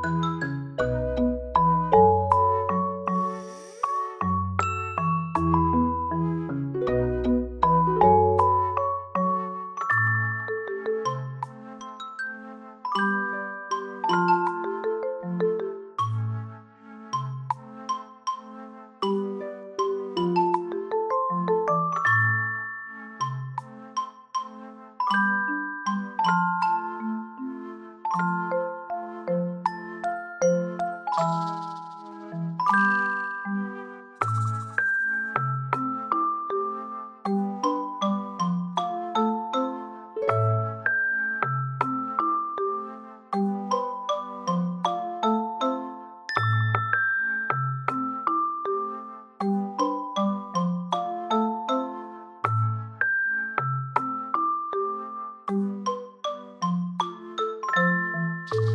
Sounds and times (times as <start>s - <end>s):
Marimba, xylophone: 0.0s - 16.5s, 17.2s - 58.7s
Glockenspiel: 0.0s - 58.7s.